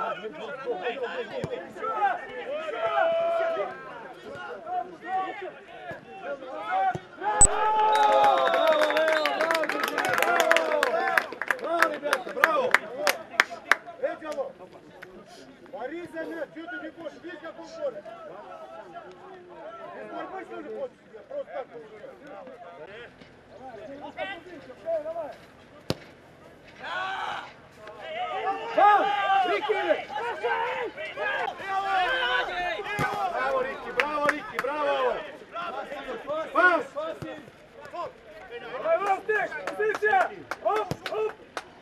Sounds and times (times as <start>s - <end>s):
Speech: 0.0s - 7.2s, 9.0s - 25.9s, 27.8s - 41.4s.